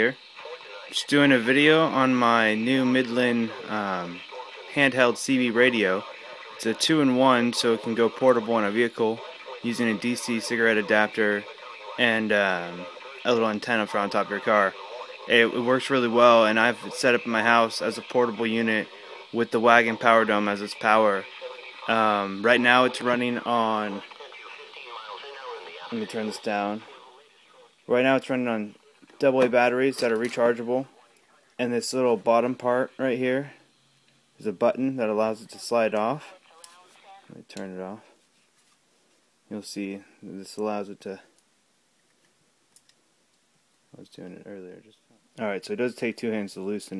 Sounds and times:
Speech: 0.0s - 27.2s, 27.9s - 30.9s, 31.6s - 33.6s, 34.4s - 38.1s, 39.5s - 41.3s, 44.0s - 47.0s
Radio: 0.0s - 38.2s, 44.0s - 47.0s.

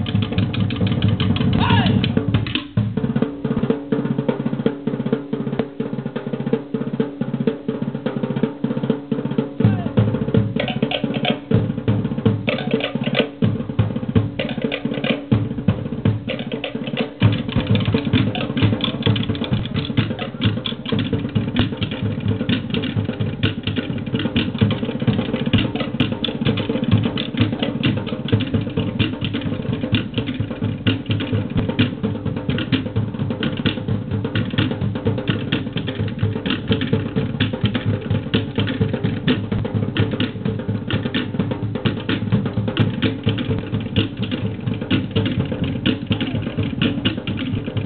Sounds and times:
Music: 0.0s - 47.8s.

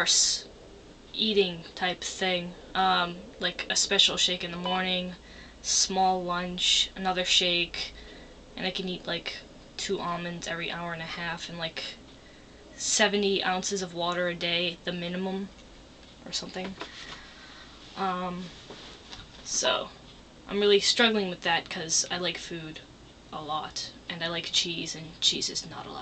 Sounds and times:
Speech: 0.0s - 0.5s, 1.2s - 8.0s, 8.6s - 12.0s, 12.8s - 15.5s, 16.2s - 16.8s, 18.0s - 18.5s, 19.4s - 26.0s.

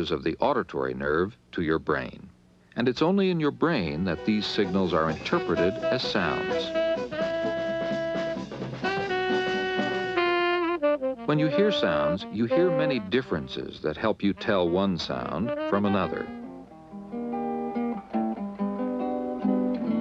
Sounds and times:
Speech: 0.0s - 6.8s, 11.3s - 16.4s
Music: 3.7s - 20.0s.

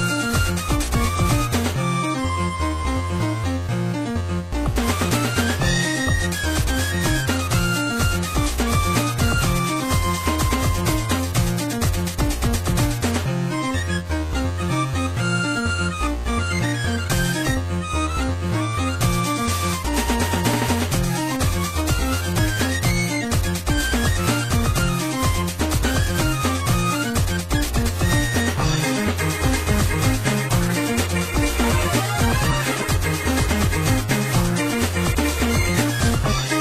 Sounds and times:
Music: 0.0s - 36.6s.

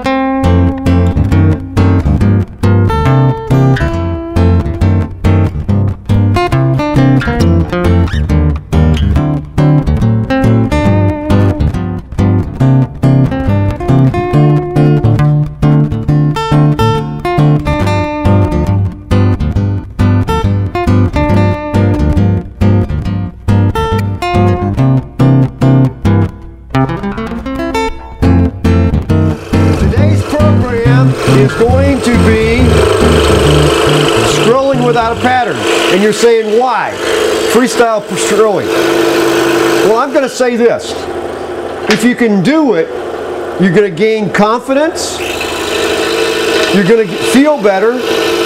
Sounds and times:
Music: 0.0s - 38.7s
Power tool: 29.3s - 48.4s
Speech: 29.8s - 32.7s, 34.3s - 38.7s, 39.8s - 41.1s, 41.9s - 42.9s, 43.6s - 45.2s, 46.7s - 48.1s.

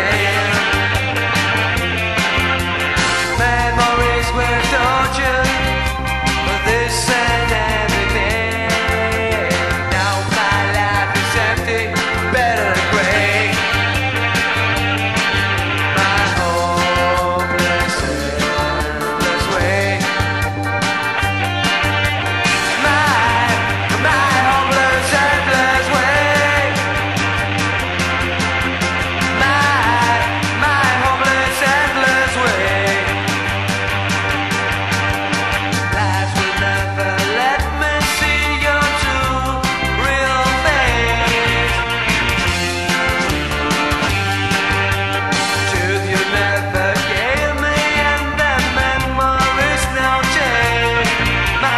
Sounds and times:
Music: 0.0s - 51.7s.

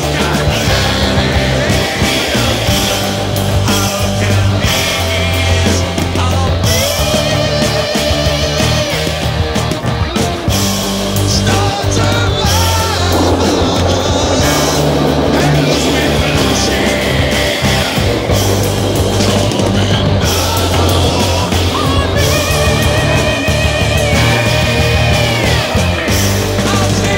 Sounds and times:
Music: 0.0s - 27.1s.

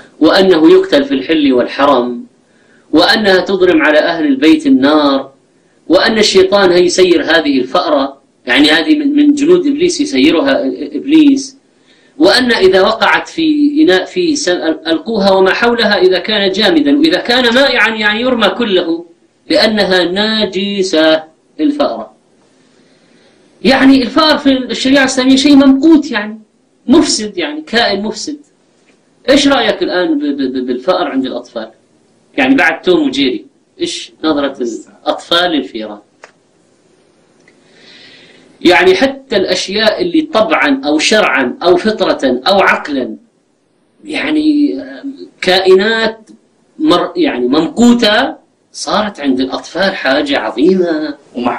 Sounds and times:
Speech: 0.0s - 2.3s, 2.9s - 11.6s, 12.2s - 22.2s, 23.6s - 28.5s, 29.2s - 36.1s, 38.6s - 43.3s, 44.0s - 51.5s.

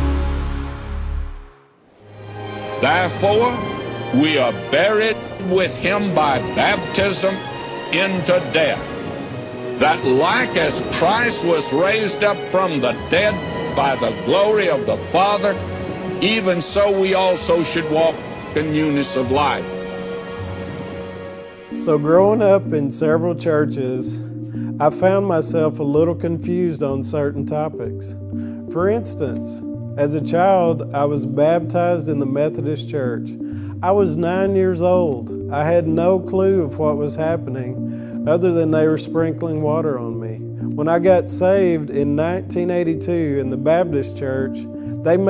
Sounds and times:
Music: 0.0s - 45.2s
Speech: 2.8s - 8.8s, 9.8s - 15.6s, 16.2s - 19.7s, 21.8s - 24.2s, 24.8s - 45.2s.

